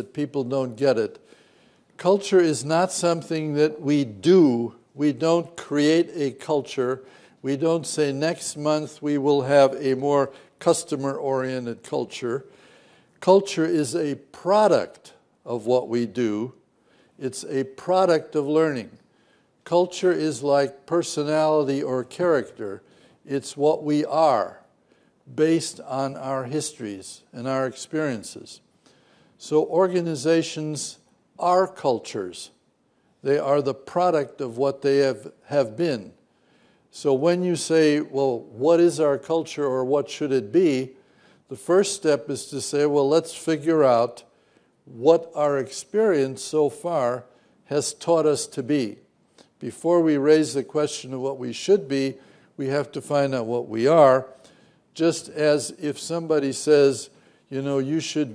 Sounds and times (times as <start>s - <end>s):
Male speech, man speaking: 0.0s - 1.2s, 2.0s - 12.5s, 13.2s - 16.6s, 17.2s - 19.0s, 19.6s - 24.6s, 25.3s - 28.6s, 29.4s - 32.6s, 33.2s - 36.2s, 37.0s - 40.9s, 41.5s - 44.3s, 44.9s - 49.0s, 49.6s - 54.4s, 55.0s - 58.3s
Narration, monologue: 0.0s - 58.3s.